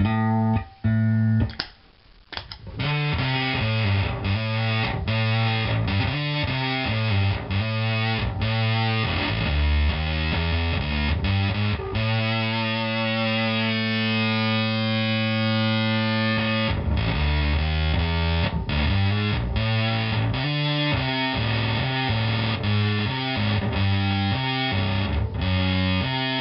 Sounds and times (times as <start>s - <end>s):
Bass guitar: 0.0s - 1.7s, 2.3s - 26.4s.